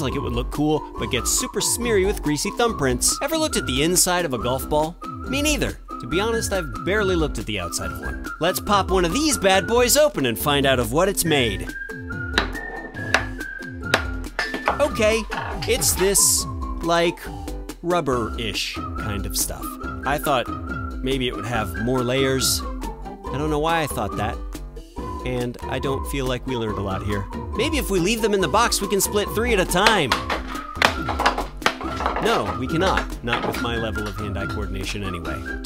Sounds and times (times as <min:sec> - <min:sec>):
Speech: 0:00.0 - 0:11.7, 0:14.8 - 0:22.7, 0:23.3 - 0:24.4, 0:25.2 - 0:30.2, 0:32.2 - 0:35.4
Music: 0:00.0 - 0:35.6.